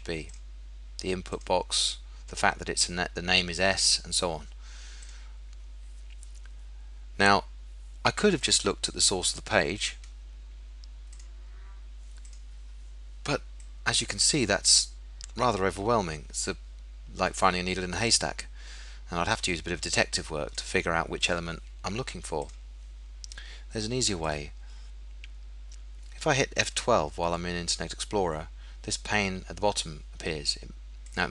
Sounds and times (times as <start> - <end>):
Speech: 0.0 - 0.3, 1.0 - 4.5, 7.2 - 7.5, 8.1 - 10.0, 13.2 - 18.5, 19.1 - 22.6, 23.7 - 24.6, 26.1 - 31.3.